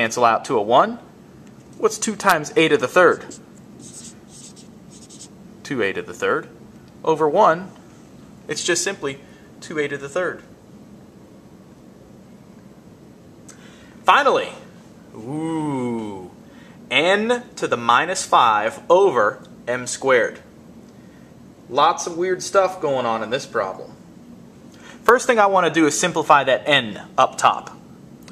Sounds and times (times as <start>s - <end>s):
Speech: 0.0s - 1.1s, 1.8s - 3.4s, 5.6s - 7.8s, 8.5s - 10.5s, 14.1s - 20.5s, 21.7s - 24.0s, 25.0s - 27.8s
Writing: 3.2s - 5.3s.